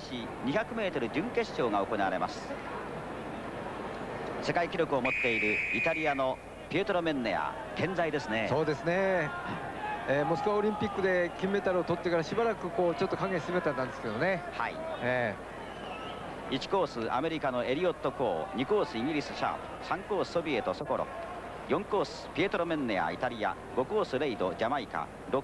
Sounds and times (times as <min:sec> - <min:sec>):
Speech: 0:00.0 - 0:02.8, 0:04.4 - 0:15.4, 0:16.5 - 0:25.4.